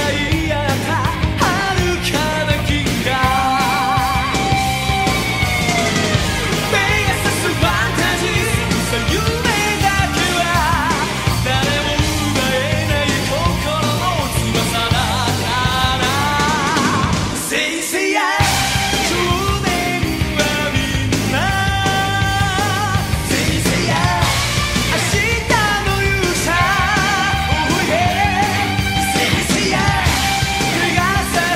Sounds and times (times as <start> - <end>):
Dance music: 0.0 - 31.5.